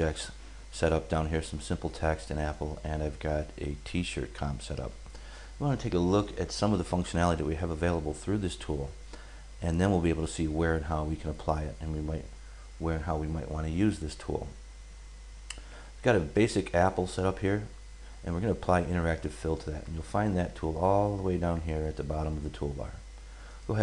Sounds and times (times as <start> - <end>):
Speech: 0.0 - 5.0, 5.6 - 9.0, 9.6 - 14.6, 16.0 - 23.0.